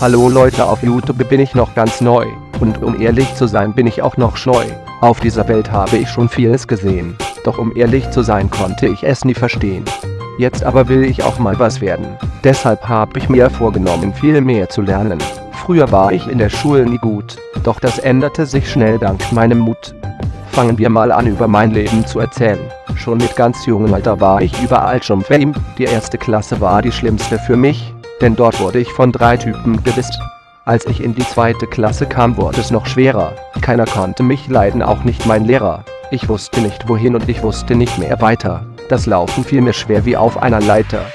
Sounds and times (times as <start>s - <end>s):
Music: 0.0s - 41.1s.